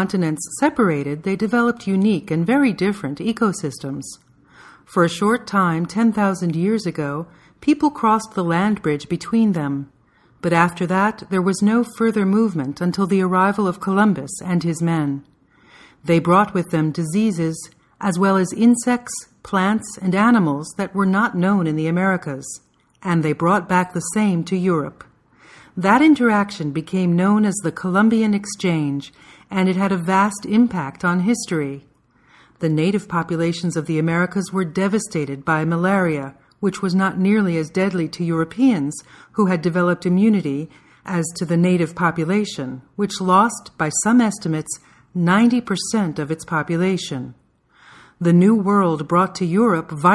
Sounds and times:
Narration, monologue: 0.0 - 50.1.

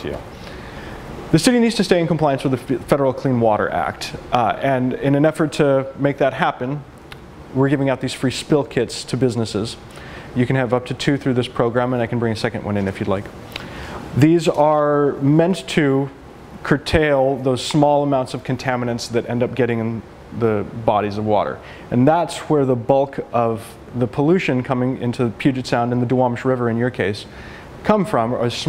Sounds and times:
Speech: 0.0 - 0.3, 1.3 - 6.9, 7.5 - 9.8, 10.4 - 13.3, 14.2 - 28.6.

